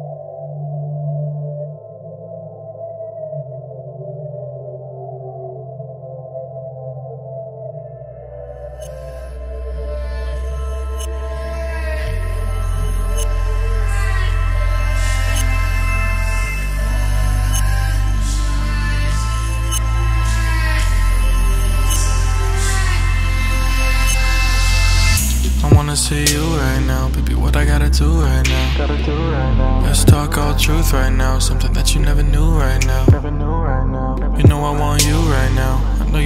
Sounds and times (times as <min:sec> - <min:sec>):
Music: 0:00.0 - 0:36.2.